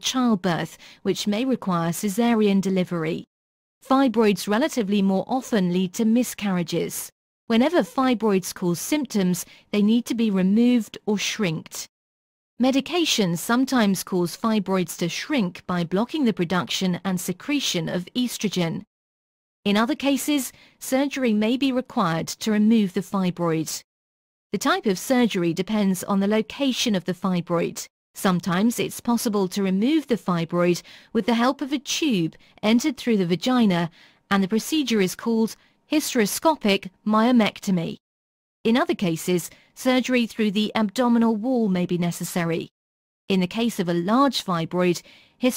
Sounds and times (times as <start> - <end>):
Speech: 0.0 - 11.9, 12.6 - 18.9, 19.7 - 23.8, 24.6 - 38.0, 38.7 - 42.7, 43.3 - 45.5.